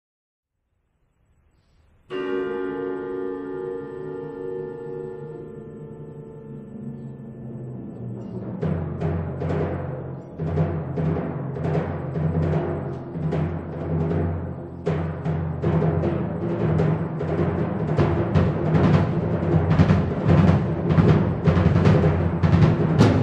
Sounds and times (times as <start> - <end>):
Music: 1.4 - 23.2.